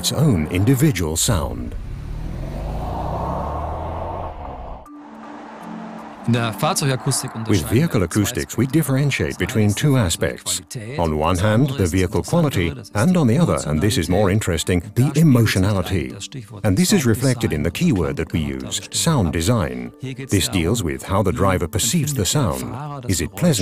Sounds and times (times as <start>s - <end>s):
Speech: 0.0s - 1.8s, 6.3s - 23.6s.